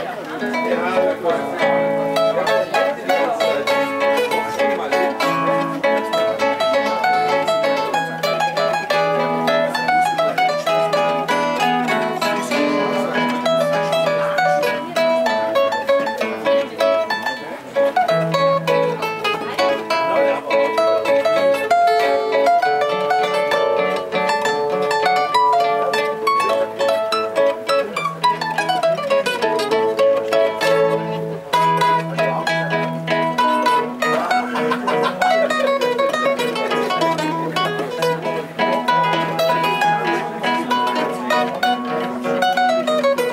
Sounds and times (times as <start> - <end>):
Pizzicato: 0.0 - 43.3
Zither: 0.0 - 43.3.